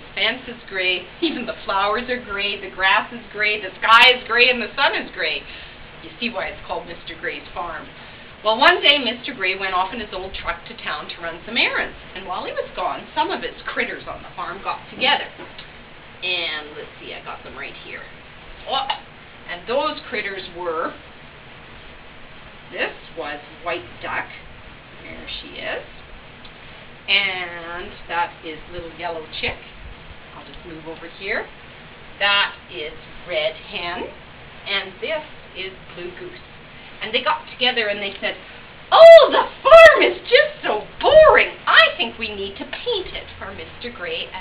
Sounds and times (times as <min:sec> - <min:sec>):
Speech: 0:00.2 - 0:15.5, 0:16.2 - 0:21.0, 0:22.7 - 0:24.4, 0:25.0 - 0:25.9, 0:27.1 - 0:29.7, 0:30.4 - 0:31.5, 0:32.2 - 0:36.4, 0:37.0 - 0:44.4.